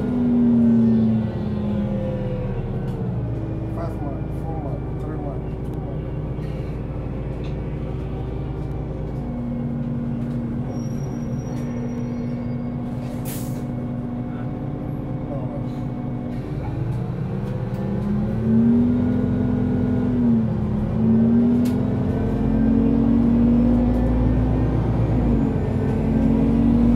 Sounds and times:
Bus: 0:00.0 - 0:26.9
Speech: 0:03.7 - 0:06.0, 0:15.2 - 0:15.8.

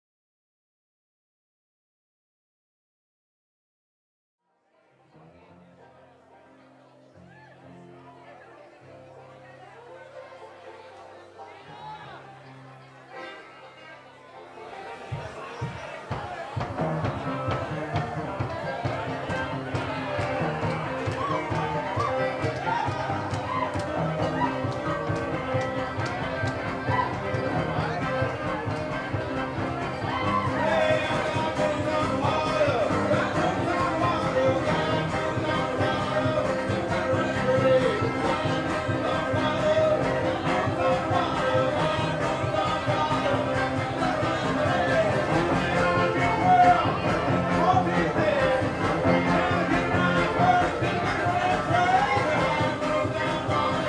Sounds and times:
Music: 0:04.4 - 0:53.8.

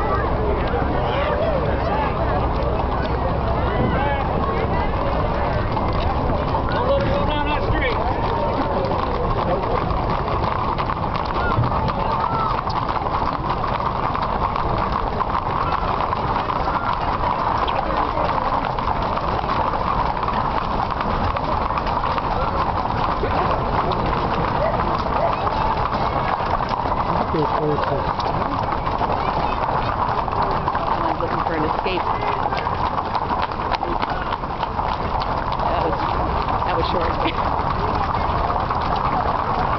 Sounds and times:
Speech: 0:00.0 - 0:06.0, 0:06.6 - 0:09.9, 0:27.1 - 0:28.2, 0:30.9 - 0:32.6, 0:35.6 - 0:38.5
Clip-clop: 0:00.0 - 0:39.7.

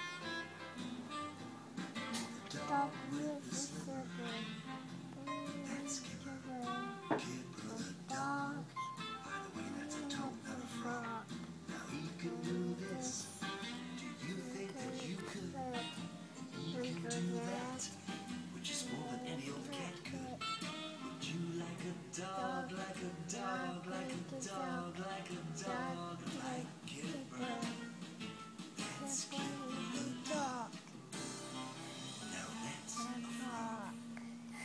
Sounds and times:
Music: 0:00.0 - 0:34.6
Speech: 0:02.5 - 0:04.5, 0:05.2 - 0:08.7, 0:11.8 - 0:13.3, 0:14.2 - 0:16.0, 0:16.6 - 0:17.9, 0:18.6 - 0:20.4, 0:22.3 - 0:25.0, 0:25.6 - 0:27.8, 0:28.8 - 0:30.7.

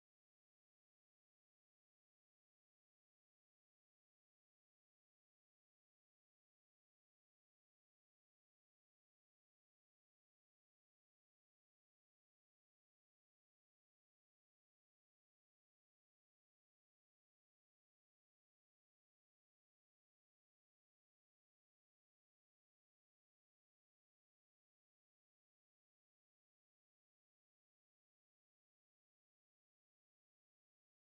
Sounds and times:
Music: 0:00.0 - 0:31.0.

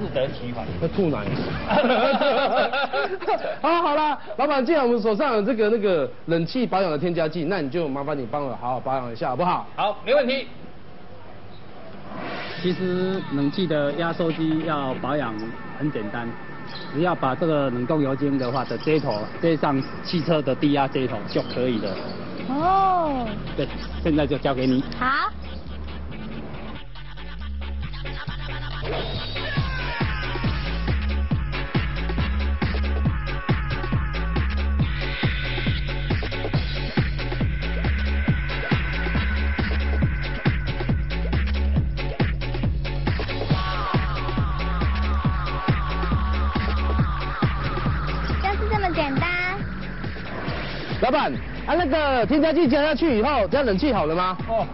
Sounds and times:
Music: 0:12.1 - 0:54.7.

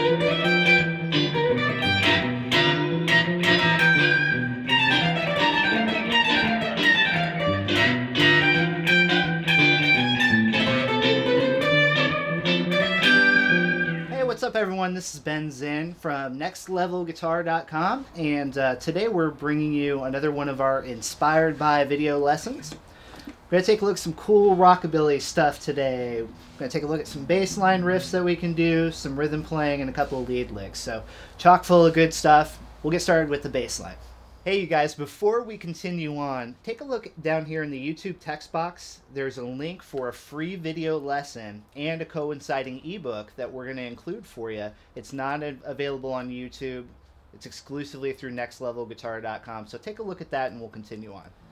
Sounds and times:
Speech: 0:14.1 - 0:22.8, 0:23.5 - 0:51.3.

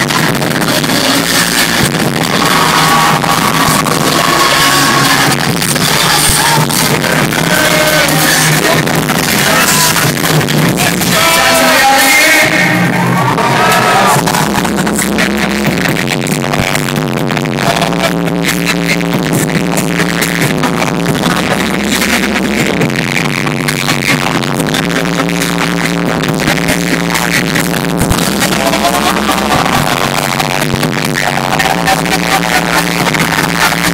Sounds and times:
Music: 0:00.0 - 0:33.9
Speech: 0:10.8 - 0:12.8.

